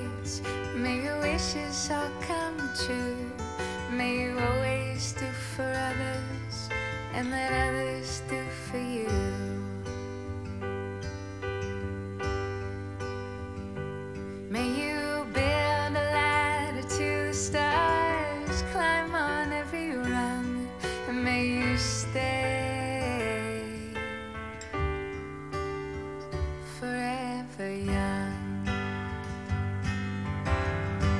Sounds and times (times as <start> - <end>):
Tender music: 0.0 - 31.1.